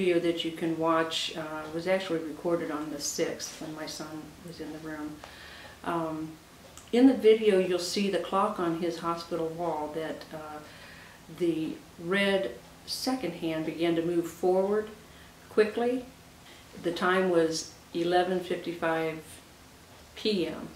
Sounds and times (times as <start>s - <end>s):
Speech: 0.0s - 10.7s, 11.3s - 16.1s, 16.8s - 19.5s, 20.2s - 20.7s.